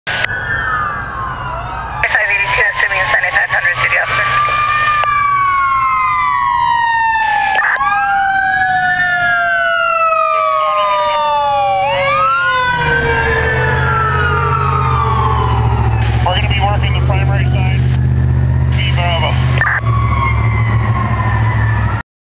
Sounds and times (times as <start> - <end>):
Outside, urban or manmade: 0.0 - 22.0
Fire engine, fire truck (siren): 0.1 - 22.0
Speech: 2.0 - 4.5, 16.2 - 17.8, 18.8 - 19.8.